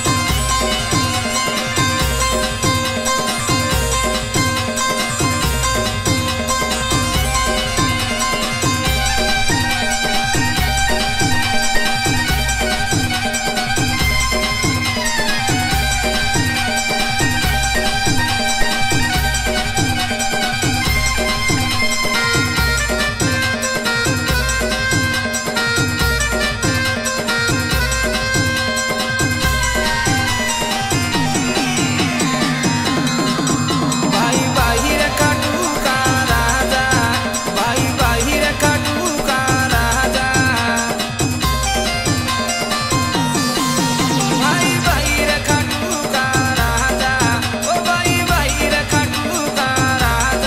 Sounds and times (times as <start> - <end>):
Music: 0.0 - 50.4.